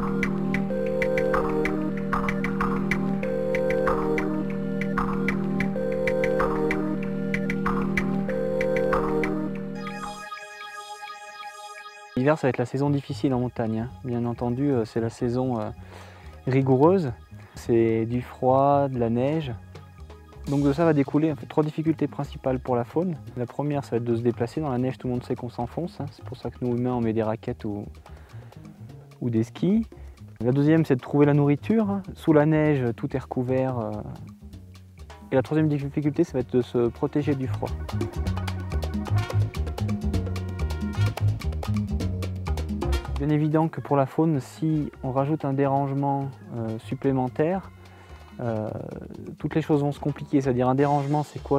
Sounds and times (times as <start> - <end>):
Music: 0.0 - 51.5
Speech: 12.2 - 15.8, 16.4 - 19.6, 20.5 - 27.9, 29.2 - 34.3, 35.3 - 37.8, 43.2 - 47.7, 48.4 - 51.5.